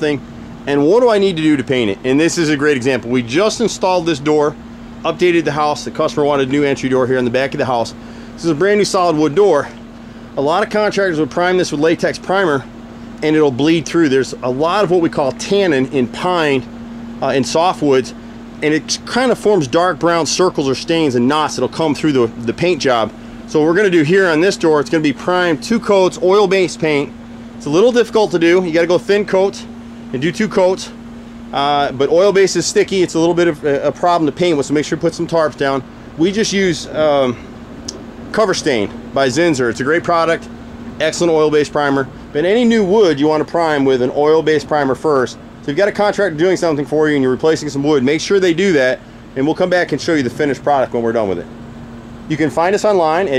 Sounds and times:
Speech: 0.0 - 9.8, 10.4 - 37.5, 38.3 - 51.5, 52.3 - 53.3.

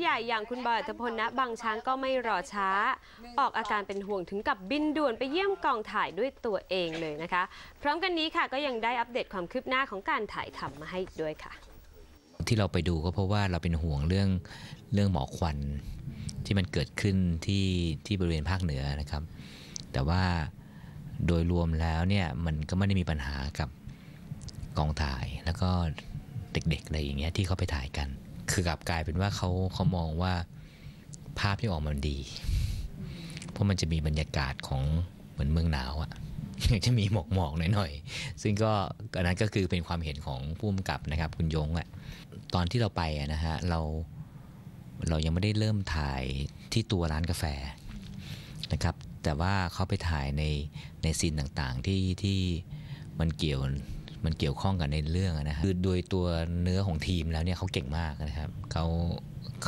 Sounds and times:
Speech: 0.0 - 11.6, 12.4 - 15.8, 21.2 - 23.7, 26.6 - 30.5, 31.4 - 32.4, 33.6 - 44.1, 45.0 - 47.8, 48.7 - 52.6, 53.2 - 59.6.

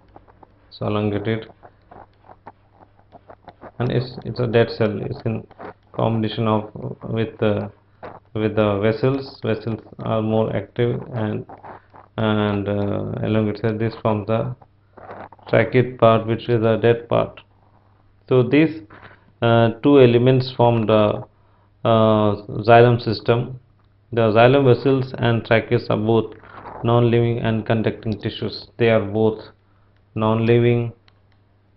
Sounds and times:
Inside, small room: 0.0 - 31.7
Speech: 0.7 - 1.5, 3.8 - 7.7, 8.4 - 11.6, 12.2 - 14.6, 15.5 - 17.4, 18.3 - 29.6, 30.2 - 31.0.

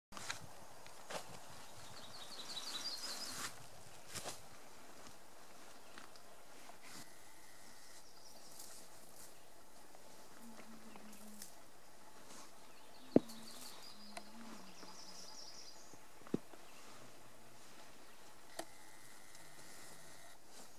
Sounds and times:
Chirp, tweet: 1.7 - 3.5, 12.7 - 16.0.

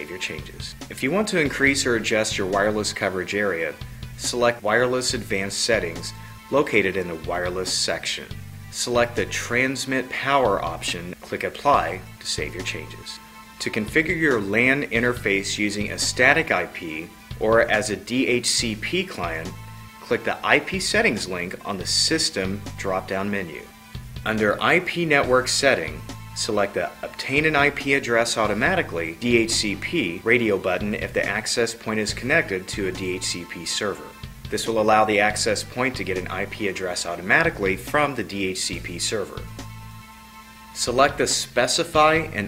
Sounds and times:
Speech: 0.0 - 23.7, 24.3 - 39.5, 40.8 - 42.4
Music: 0.0 - 42.4.

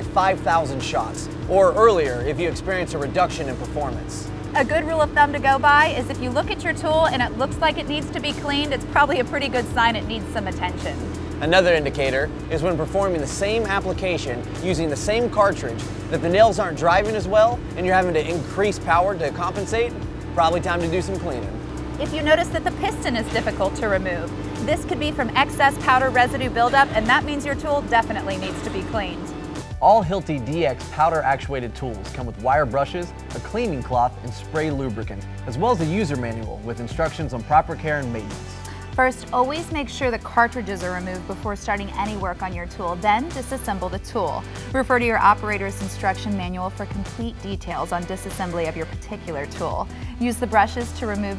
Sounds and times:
Speech: 0.0 - 21.4, 22.0 - 29.2, 29.8 - 38.3, 39.0 - 51.3
Music: 0.0 - 51.3.

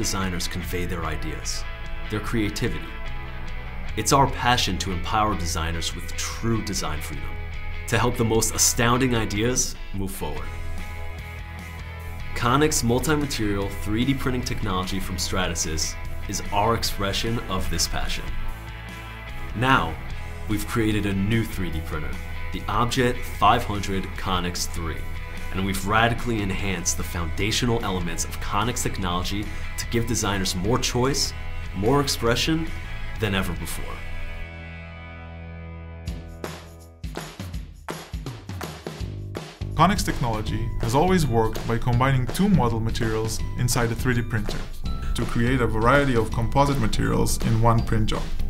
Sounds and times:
Speech: 0.0 - 3.0, 4.0 - 10.6, 12.4 - 18.4, 19.5 - 34.1, 39.8 - 48.4
Music: 0.0 - 48.5.

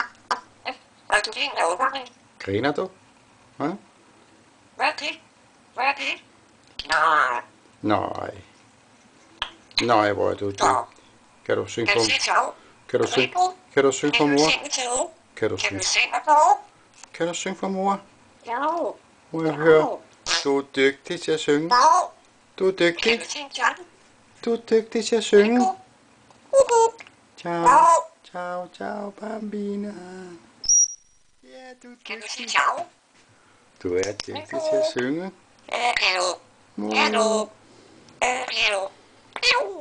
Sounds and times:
Inside, small room: 0.0 - 39.8
Speech: 1.2 - 3.0, 9.8 - 16.3, 22.6 - 23.8, 24.4 - 25.8, 33.8 - 35.4, 36.8 - 37.5.

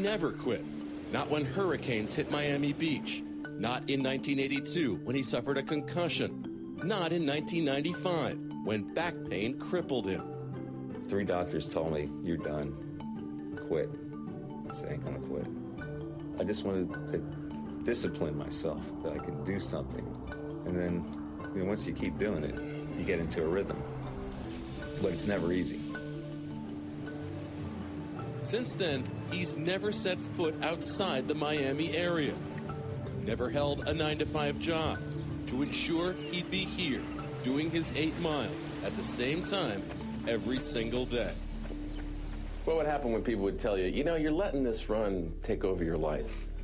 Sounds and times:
Music: 0.0 - 46.6
Speech: 1.2 - 10.2, 14.8 - 15.5, 17.9 - 20.0, 20.7 - 23.8, 25.0 - 25.8, 33.3 - 41.4, 42.7 - 46.4.

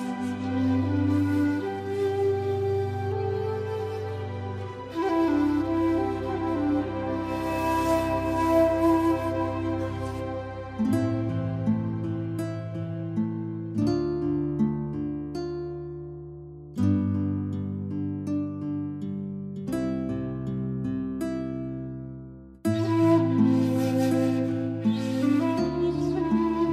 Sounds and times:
Music: 0.0 - 26.7.

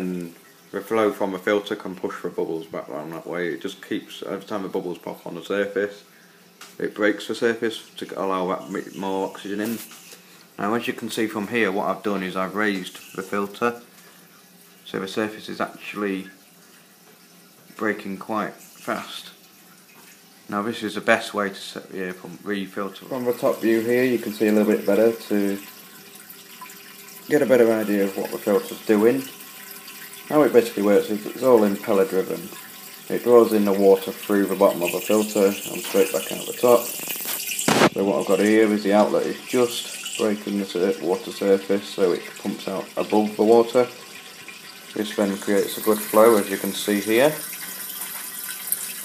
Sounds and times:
Speech: 0.0 - 6.1, 6.8 - 9.9, 10.6 - 13.9, 14.8 - 16.4, 17.8 - 19.4, 20.5 - 25.7, 27.3 - 29.4, 30.3 - 36.9, 37.9 - 44.0, 45.0 - 47.4
Water: 0.0 - 49.0.

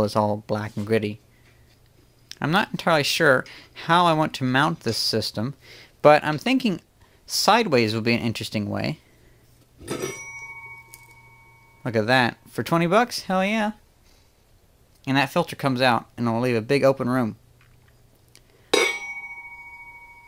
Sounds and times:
Speech: 0.0 - 1.2, 2.3 - 9.0, 11.9 - 13.8, 15.0 - 17.4
Inside, small room: 0.0 - 20.2.

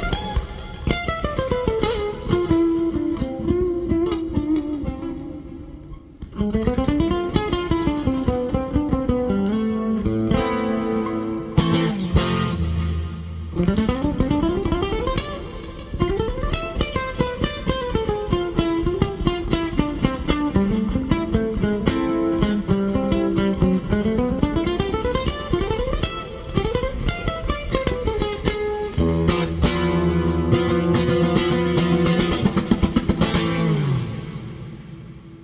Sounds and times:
Acoustic guitar: 0.0 - 35.4
Bass guitar: 6.2 - 26.0, 26.6 - 35.4.

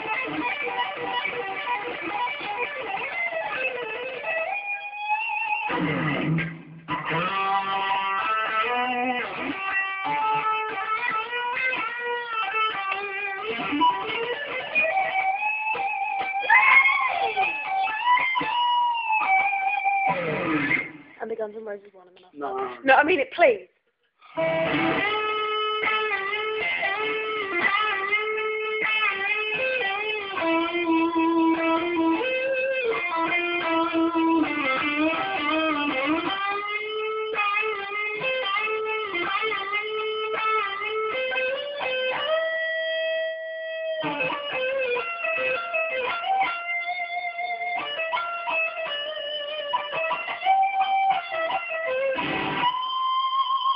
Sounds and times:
Speech: 21.2 - 23.7.

